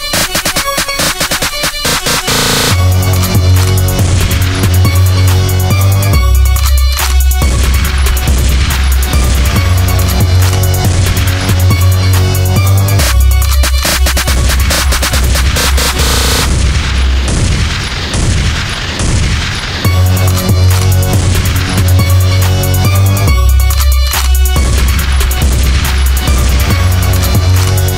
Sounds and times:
Music: 0.0s - 27.9s.

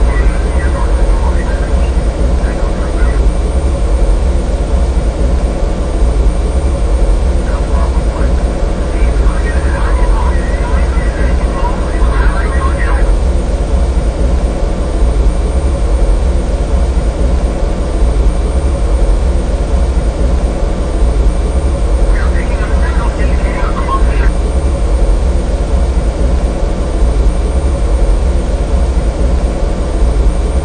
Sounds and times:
Speech: 0.0s - 3.2s, 7.4s - 13.2s, 22.1s - 24.3s.

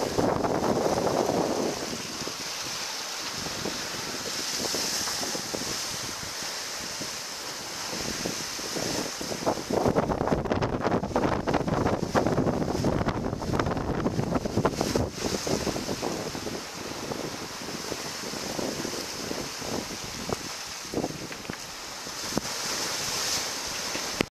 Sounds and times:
Rustling leaves: 0.0s - 24.3s.

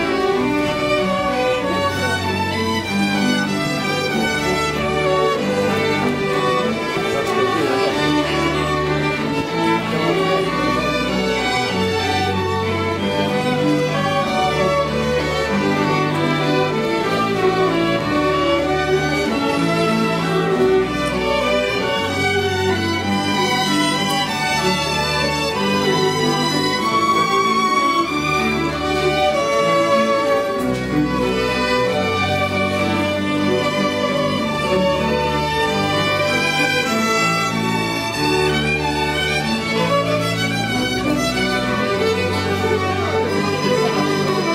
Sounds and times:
Cello: 0.0s - 44.5s
Classical music: 0.0s - 44.5s
Orchestra: 0.0s - 44.5s
String section: 0.0s - 44.5s
Violin, fiddle: 0.0s - 44.5s.

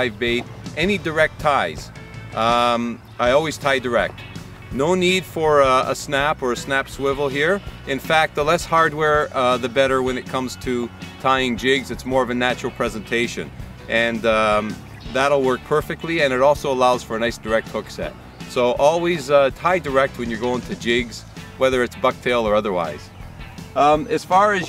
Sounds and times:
Speech: 0.0s - 4.1s, 4.8s - 23.1s, 23.8s - 24.6s
Music: 0.0s - 24.6s.

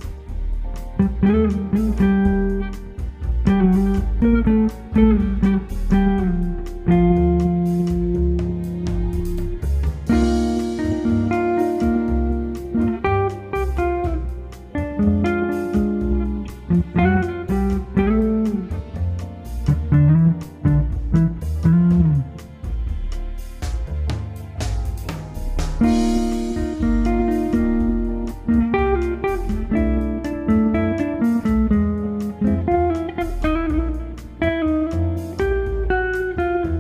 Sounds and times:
Electric guitar: 0.0s - 22.7s, 25.1s - 36.8s
Strum: 0.0s - 36.8s.

